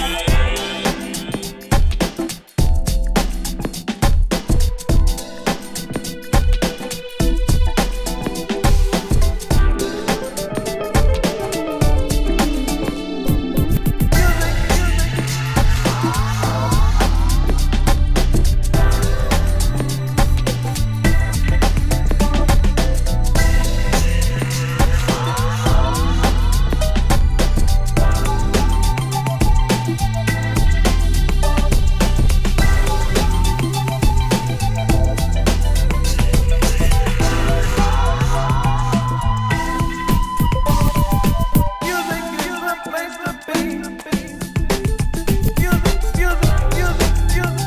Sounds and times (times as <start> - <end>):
Music: 0.0 - 47.6.